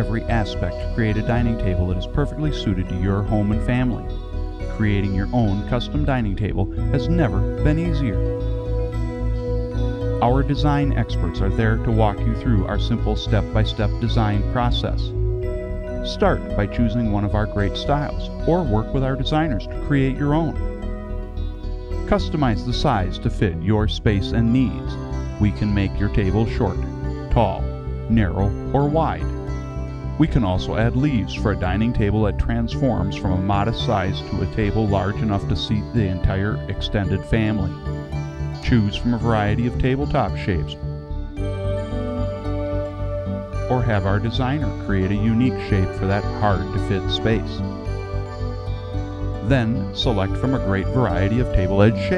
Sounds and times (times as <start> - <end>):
Speech: 0.0 - 4.1, 4.7 - 8.3, 10.2 - 15.1, 16.0 - 20.6, 22.1 - 29.3, 30.2 - 37.8, 38.6 - 40.8, 43.7 - 47.6, 49.4 - 52.1
Music: 0.0 - 52.1.